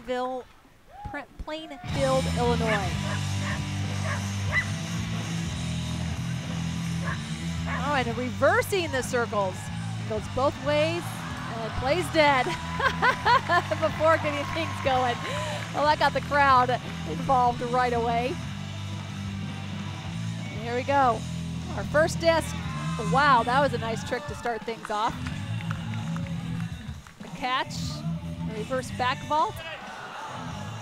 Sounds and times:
Music: 1.8s - 30.8s.

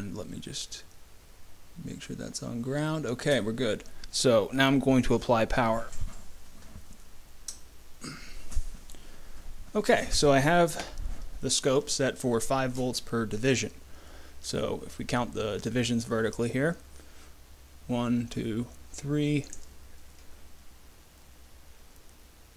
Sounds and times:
Speech: 0.0s - 0.9s, 1.8s - 6.0s, 9.7s - 13.8s, 14.4s - 16.8s, 17.9s - 19.6s
Inside, small room: 0.0s - 22.5s.

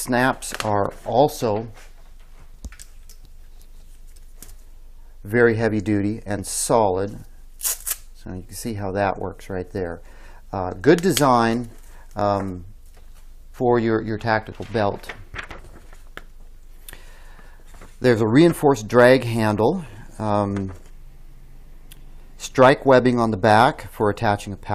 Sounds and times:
Speech: 0.0s - 1.8s, 5.2s - 7.3s, 8.2s - 12.7s, 13.6s - 15.2s, 18.0s - 20.8s, 22.4s - 24.7s.

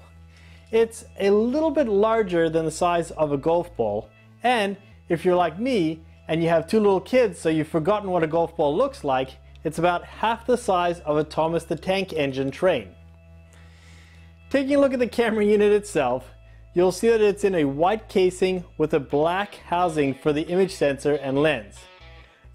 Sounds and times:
Music: 0.0s - 22.5s
Speech: 0.8s - 12.9s, 14.5s - 21.8s.

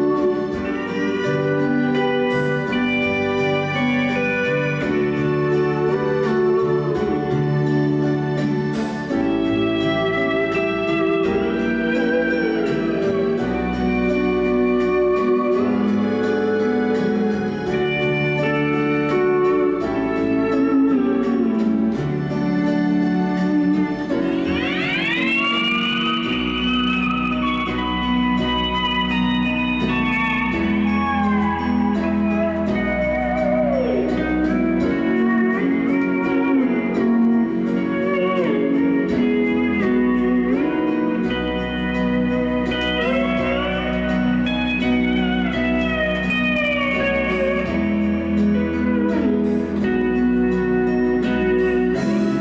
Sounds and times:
Steel guitar, slide guitar: 0.0s - 52.4s.

